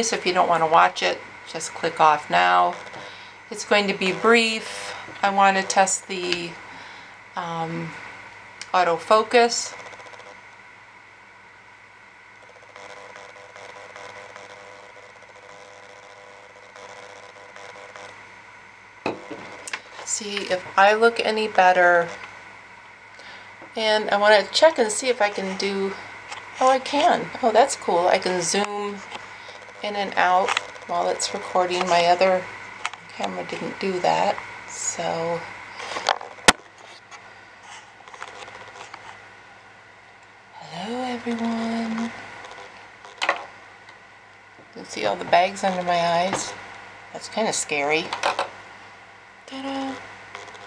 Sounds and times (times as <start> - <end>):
Speech: 0.0 - 2.8, 3.5 - 6.6, 7.4 - 8.0, 8.6 - 9.7, 20.0 - 22.2, 23.8 - 26.0, 26.6 - 29.0, 29.8 - 32.5, 33.1 - 35.5, 40.6 - 42.1, 44.8 - 46.6, 47.2 - 48.2, 49.5 - 50.0.